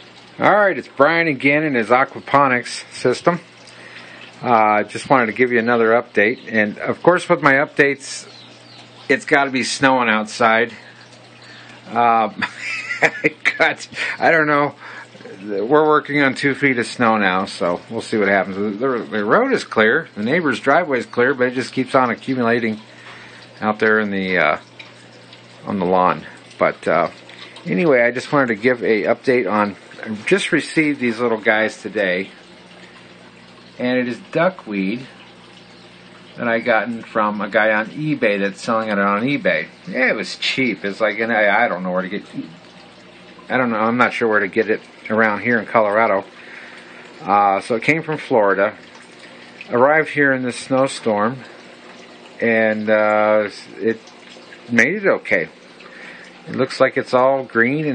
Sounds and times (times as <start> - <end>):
Speech: 0.4 - 3.5, 4.4 - 8.3, 9.1 - 10.8, 11.9 - 12.5, 13.3 - 22.9, 23.6 - 24.7, 25.6 - 32.4, 33.8 - 35.1, 36.4 - 42.6, 43.5 - 46.3, 47.2 - 48.8, 49.7 - 51.5, 52.4 - 54.0, 54.7 - 55.6, 56.5 - 57.9.